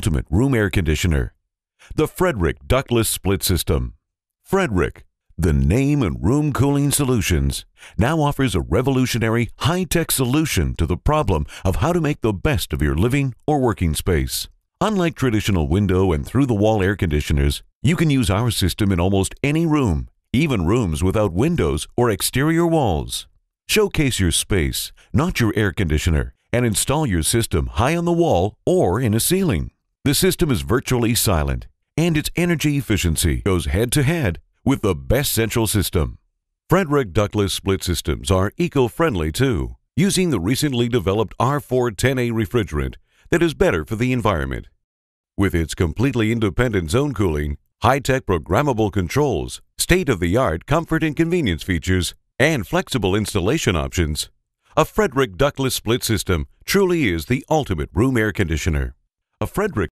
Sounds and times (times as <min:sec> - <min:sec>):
Speech: 0:00.0 - 0:44.8, 0:45.4 - 0:59.9.